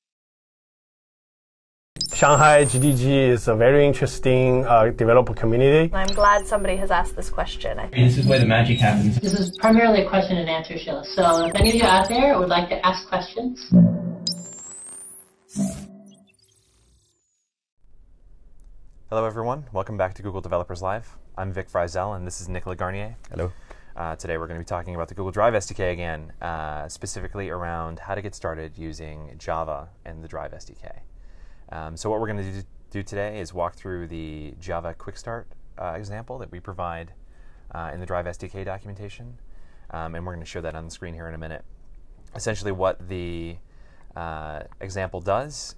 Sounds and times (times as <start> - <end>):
Speech: 2.2 - 13.7, 19.1 - 31.0, 31.7 - 37.1, 37.7 - 41.6, 42.4 - 43.6, 44.2 - 45.7.